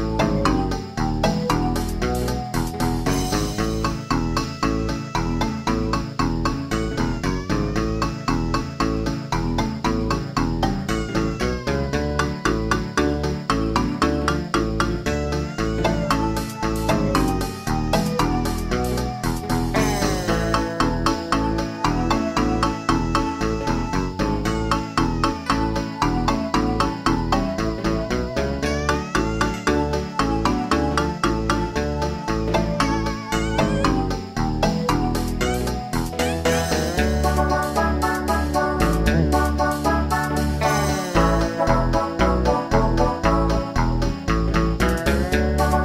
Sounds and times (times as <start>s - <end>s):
Soundtrack music: 8.9s - 45.8s.